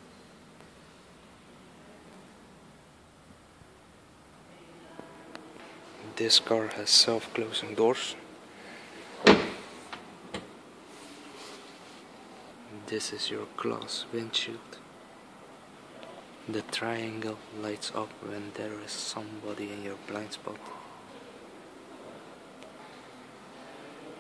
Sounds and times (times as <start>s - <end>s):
Speech: 4.5s - 8.3s, 12.7s - 14.8s, 16.0s - 21.3s.